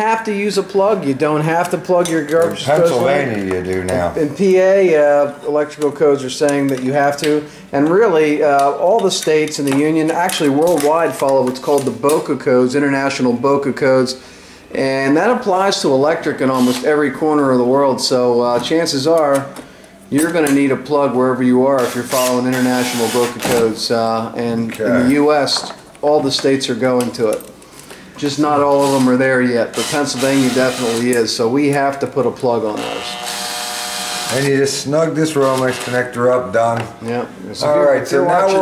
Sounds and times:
Speech: 0:00.0 - 0:14.2, 0:14.8 - 0:19.5, 0:20.1 - 0:27.5, 0:28.2 - 0:33.2, 0:34.3 - 0:38.6.

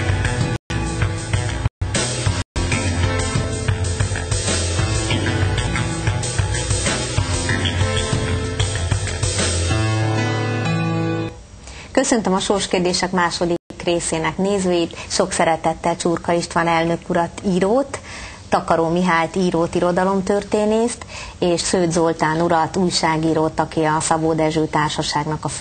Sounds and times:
Music: 0:00.0 - 0:11.4
Speech: 0:12.0 - 0:25.6.

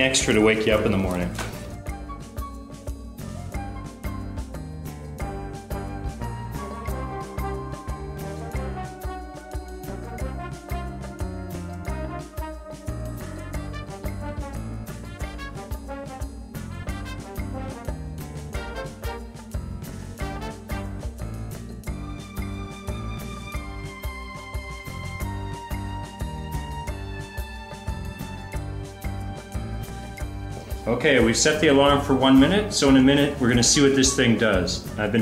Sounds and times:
Music: 0:00.0 - 0:35.2.

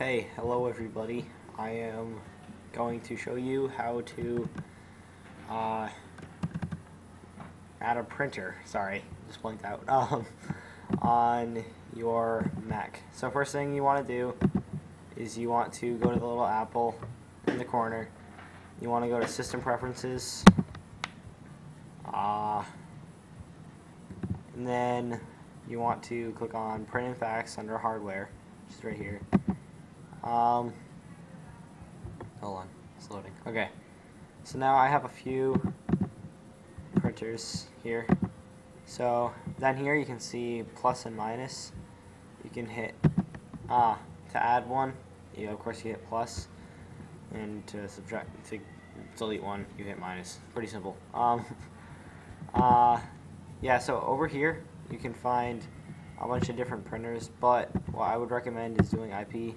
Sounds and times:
Speech: 0:00.0 - 0:04.5, 0:05.5 - 0:06.0, 0:07.8 - 0:10.4, 0:11.0 - 0:14.4, 0:15.2 - 0:18.2, 0:18.8 - 0:20.5, 0:22.1 - 0:22.8, 0:24.6 - 0:29.3, 0:30.2 - 0:30.8, 0:32.4 - 0:33.8, 0:34.4 - 0:35.6, 0:37.0 - 0:38.1, 0:38.9 - 0:41.8, 0:42.4 - 0:43.0, 0:43.7 - 0:46.5, 0:47.3 - 0:51.7, 0:52.5 - 0:59.5.

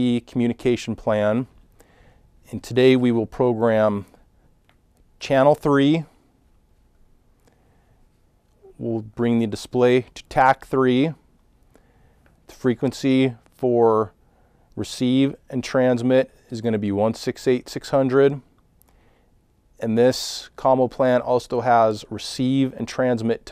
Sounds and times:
Speech: 0:00.0 - 0:01.6, 0:02.5 - 0:04.2, 0:05.2 - 0:06.2, 0:08.6 - 0:11.3, 0:12.5 - 0:14.2, 0:14.8 - 0:18.5, 0:19.8 - 0:23.5.

